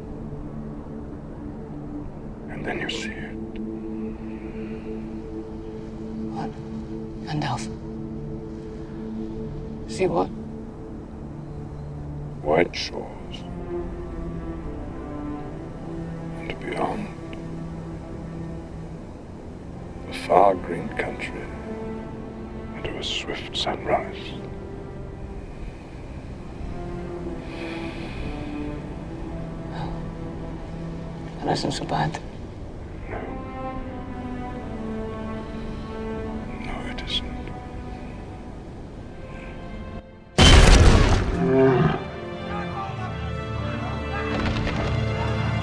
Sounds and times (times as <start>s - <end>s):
Music: 0.0s - 45.6s.